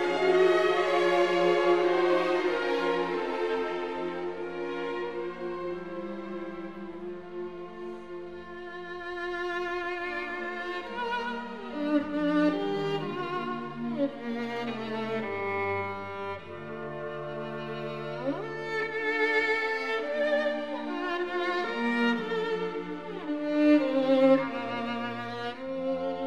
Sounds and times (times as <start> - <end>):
Violin, fiddle: 0.0 - 26.2.